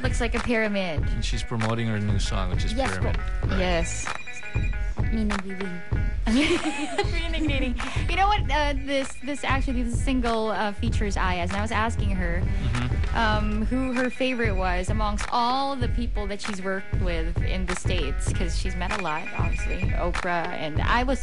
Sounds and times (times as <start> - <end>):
Speech: 0.0 - 4.1, 8.1 - 21.2
Music: 0.0 - 21.2.